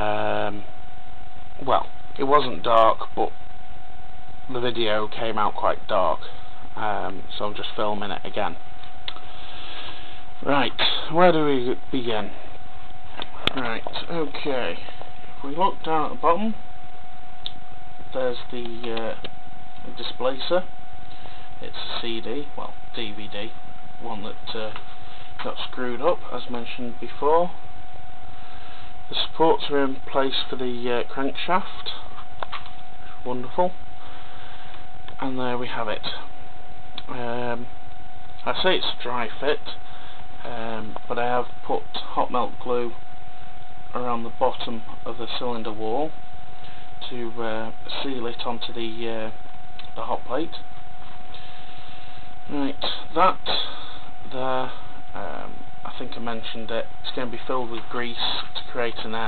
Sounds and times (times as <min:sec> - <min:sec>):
Speech: 0:00.0 - 0:00.7, 0:01.6 - 0:03.4, 0:04.5 - 0:08.6, 0:10.4 - 0:12.5, 0:13.2 - 0:16.6, 0:18.1 - 0:20.7, 0:21.6 - 0:24.8, 0:25.4 - 0:27.6, 0:29.1 - 0:32.1, 0:33.2 - 0:33.8, 0:35.2 - 0:36.3, 0:37.0 - 0:37.7, 0:38.4 - 0:43.0, 0:43.9 - 0:46.2, 0:47.0 - 0:50.7, 0:52.5 - 0:59.2.